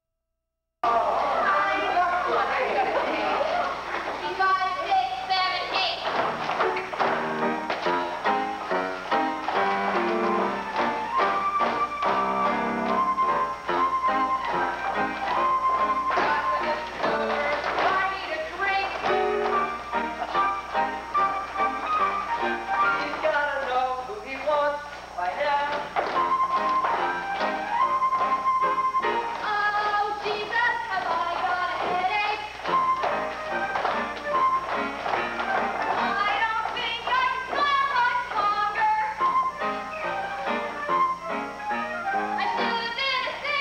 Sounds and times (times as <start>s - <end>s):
Music: 1.2s - 43.6s.